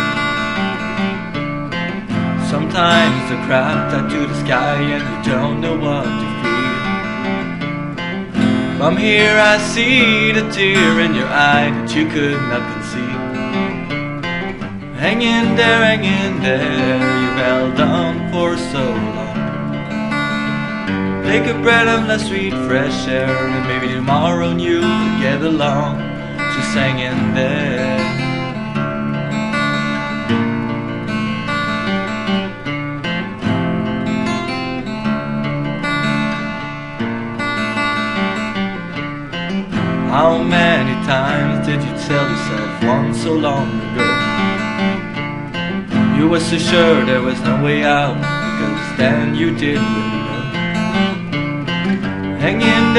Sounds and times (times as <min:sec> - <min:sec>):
Acoustic guitar: 0:00.0 - 0:52.9
Strum: 0:00.0 - 0:52.9.